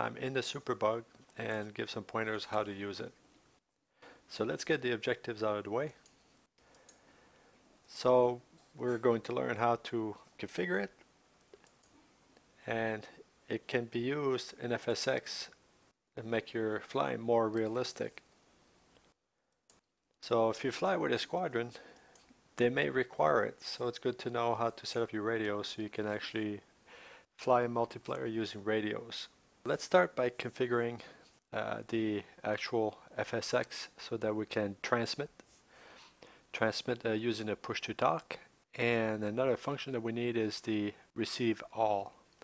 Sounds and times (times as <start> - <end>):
Speech: 0.0 - 3.2, 4.3 - 6.0, 7.9 - 11.0, 12.6 - 15.6, 16.2 - 18.2, 20.2 - 21.8, 22.6 - 26.7, 27.4 - 35.4, 36.5 - 42.4.